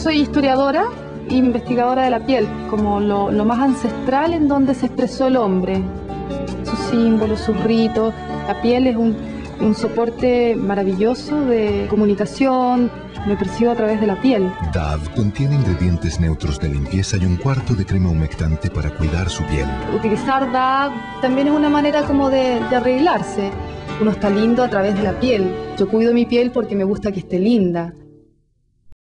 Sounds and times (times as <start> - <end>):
Music: 0.0 - 28.9
Speech: 6.7 - 28.0.